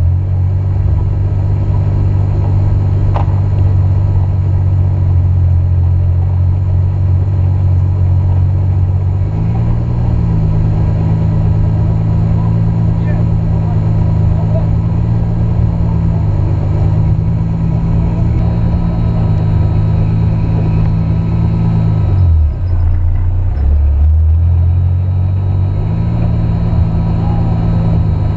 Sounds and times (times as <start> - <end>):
Car: 0.0 - 28.3.